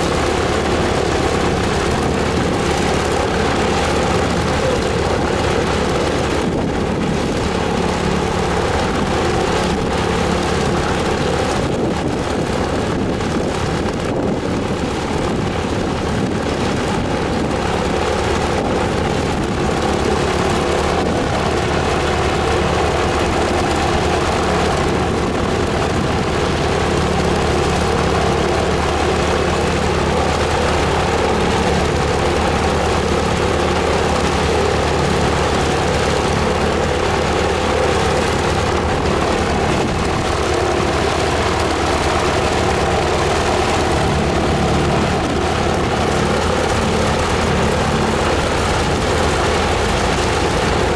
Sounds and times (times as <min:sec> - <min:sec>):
Heavy engine (low frequency): 0:00.0 - 0:50.9
Vehicle: 0:00.0 - 0:50.9.